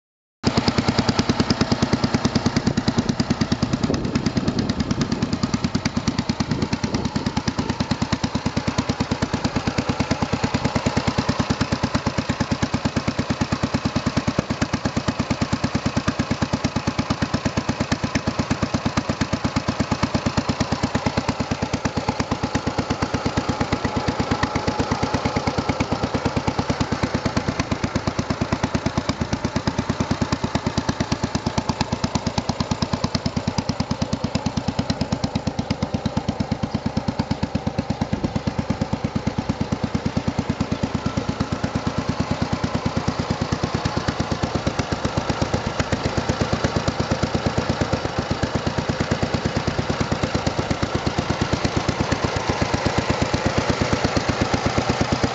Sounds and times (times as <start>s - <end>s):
Motorcycle: 0.4s - 55.3s.